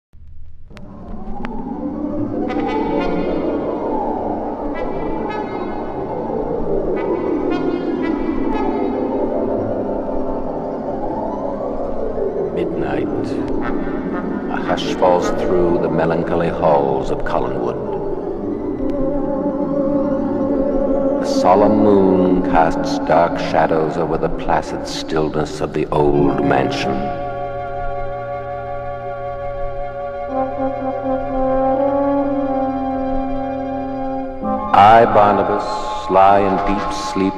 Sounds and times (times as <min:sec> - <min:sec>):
Brass instrument: 0:02.2 - 0:10.2, 0:12.6 - 0:18.6, 0:19.4 - 0:37.3.